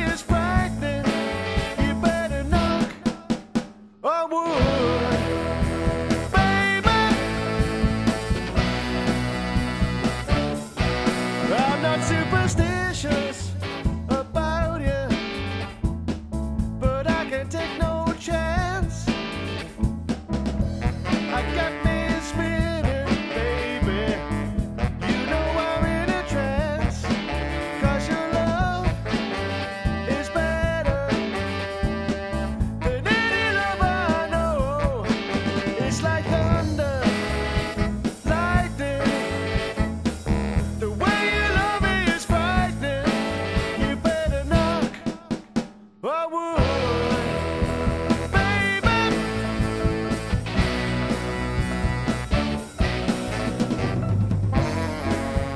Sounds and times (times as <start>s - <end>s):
Bass drum: 0.0s - 3.6s, 4.6s - 45.6s, 46.6s - 55.5s
Drum kit: 0.0s - 46.0s, 46.6s - 55.5s
Ska: 0.0s - 55.5s.